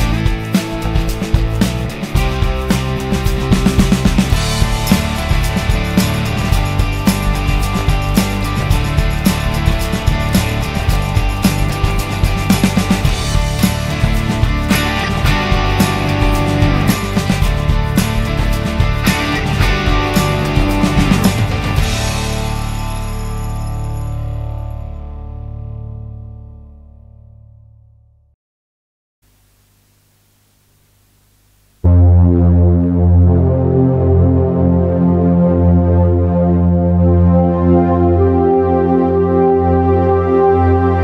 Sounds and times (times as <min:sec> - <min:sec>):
Music: 0:00.0 - 0:28.4, 0:31.8 - 0:41.0.